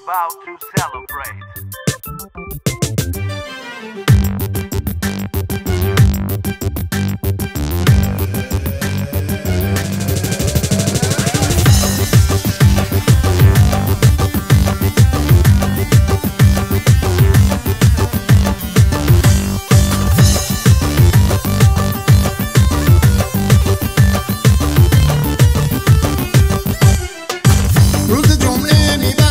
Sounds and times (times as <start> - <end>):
Exciting music: 0.0 - 29.3.